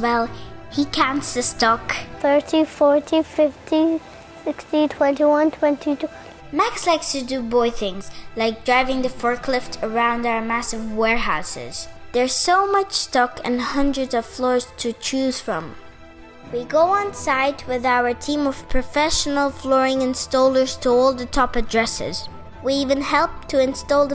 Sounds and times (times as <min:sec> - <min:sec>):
Speech: 0:00.0 - 0:15.8, 0:16.5 - 0:24.1
Music: 0:00.0 - 0:24.1.